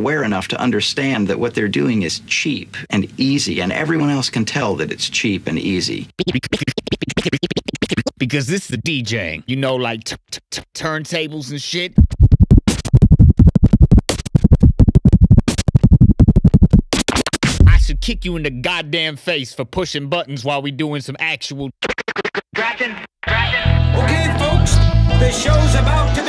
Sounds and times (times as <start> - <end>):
Speech: 0.0 - 6.1, 8.2 - 12.0, 17.7 - 21.7, 22.6 - 24.6
Scratching (performance technique): 6.1 - 8.9, 11.9 - 18.8, 21.5 - 22.6.